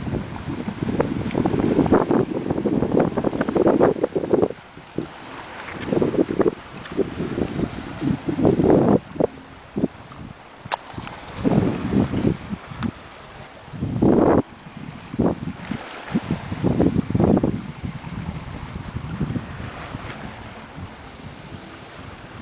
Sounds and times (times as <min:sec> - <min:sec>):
Outside, rural or natural: 0:00.0 - 0:22.4.